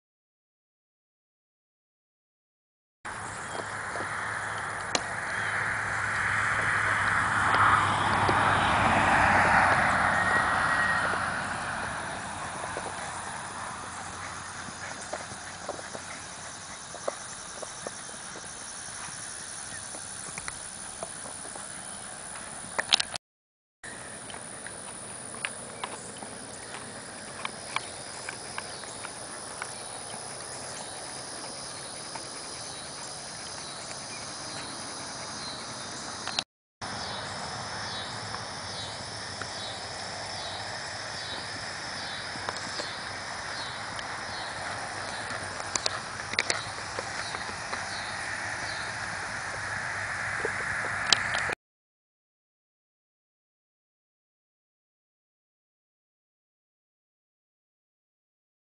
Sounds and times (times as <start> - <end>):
Clip-clop: 3.3 - 23.2, 23.9 - 36.4, 38.0 - 51.6.